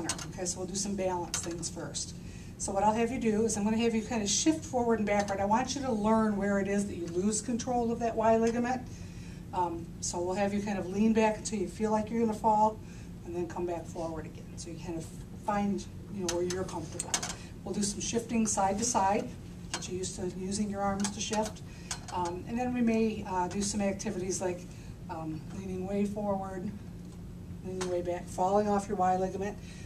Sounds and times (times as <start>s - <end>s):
Speech: 0.0s - 8.9s, 9.6s - 26.8s, 27.6s - 29.6s.